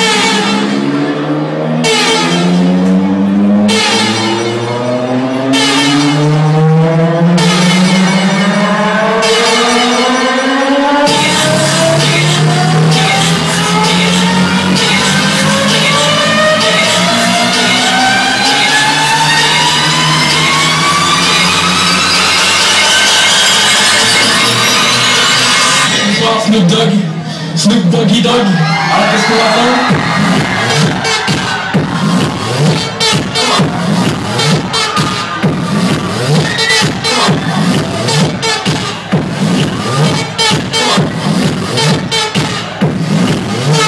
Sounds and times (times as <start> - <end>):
Music: 0.0 - 43.8.